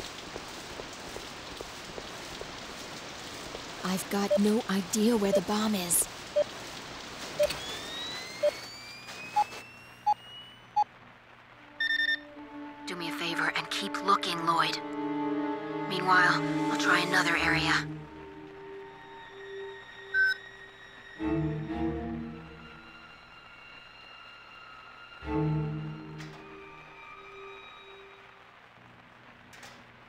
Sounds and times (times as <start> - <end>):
Speech: 3.8 - 6.1, 12.9 - 14.8, 15.9 - 17.9
Music: 11.6 - 28.4.